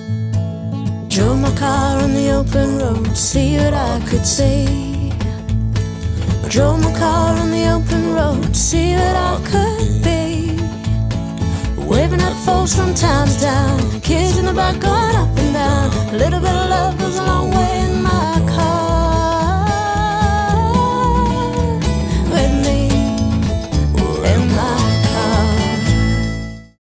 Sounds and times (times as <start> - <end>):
Music: 0.0 - 26.8.